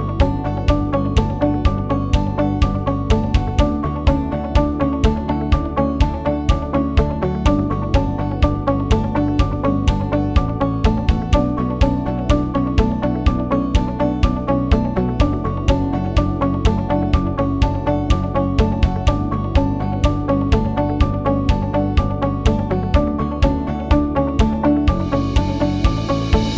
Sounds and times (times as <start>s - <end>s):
Music: 0.0s - 26.5s.